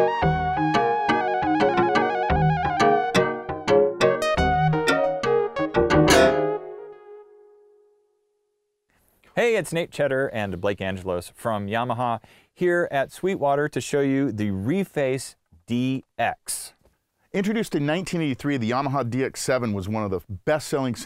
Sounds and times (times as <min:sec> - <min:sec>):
Speech: 0:09.4 - 0:16.8, 0:17.4 - 0:21.0.